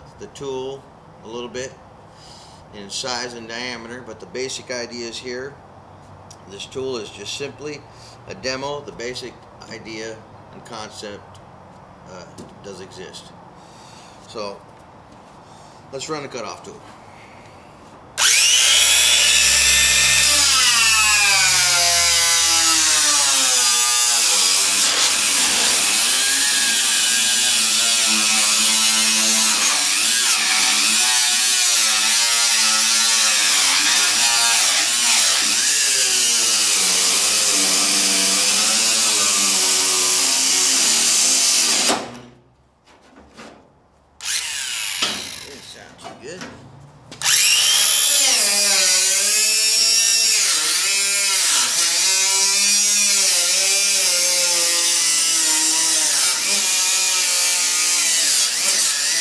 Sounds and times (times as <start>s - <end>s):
Power tool: 18.2s - 42.3s, 44.2s - 45.8s, 47.2s - 59.2s.